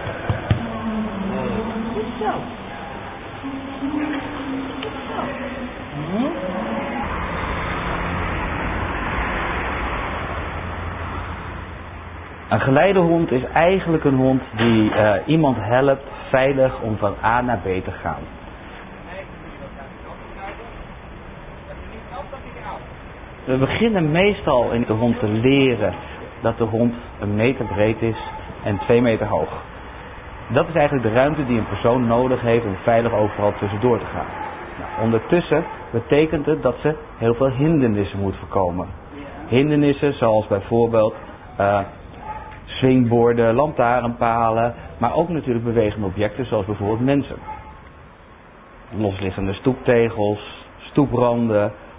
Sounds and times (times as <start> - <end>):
Speech: 23.5 - 29.6, 35.0 - 42.0, 42.7 - 47.4, 48.9 - 51.8.